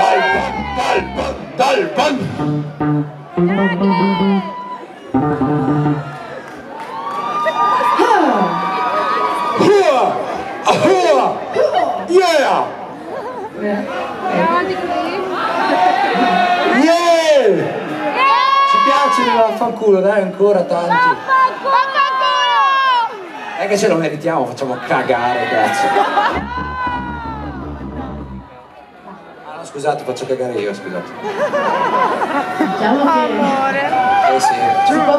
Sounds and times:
Music: 0.0s - 1.6s, 2.2s - 6.2s, 26.3s - 28.5s.

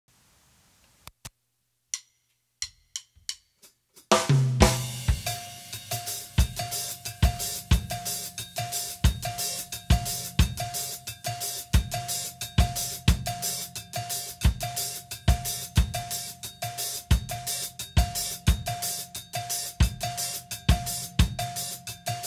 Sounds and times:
Cowbell: 5.0s - 22.2s.

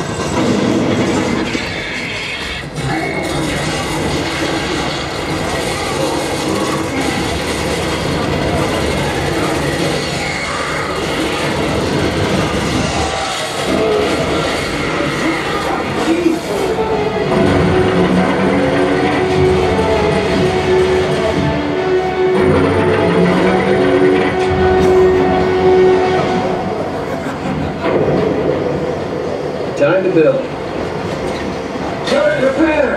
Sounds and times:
Music: 0.0s - 29.4s.

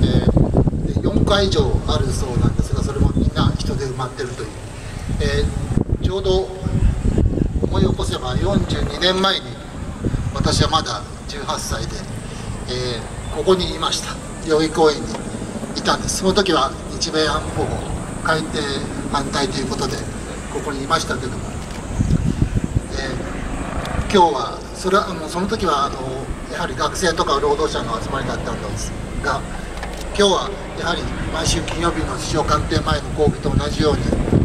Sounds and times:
Male speech, man speaking: 0.0s - 4.6s, 5.2s - 6.7s, 7.6s - 9.6s, 10.4s - 12.1s, 12.7s - 21.5s, 22.9s - 23.4s, 24.0s - 29.5s, 30.1s - 34.2s
Narration, monologue: 0.0s - 34.4s.

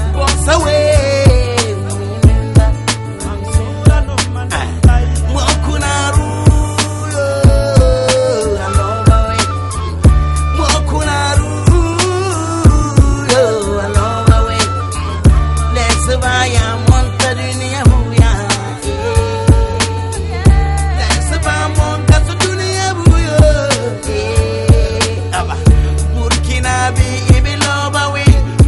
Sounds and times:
Music: 0.0s - 28.6s.

